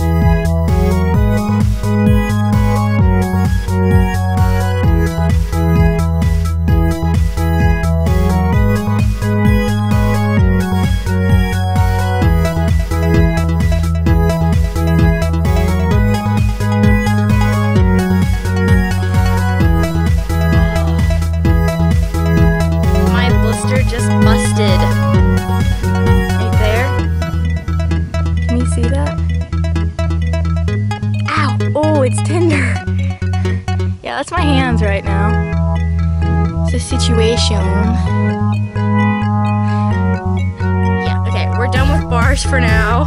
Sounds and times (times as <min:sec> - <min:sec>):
Music: 0:00.0 - 0:43.0
Speech: 0:23.1 - 0:25.0, 0:26.4 - 0:27.0, 0:28.5 - 0:29.2, 0:31.3 - 0:32.8, 0:34.0 - 0:35.4, 0:36.7 - 0:38.1, 0:41.1 - 0:43.0.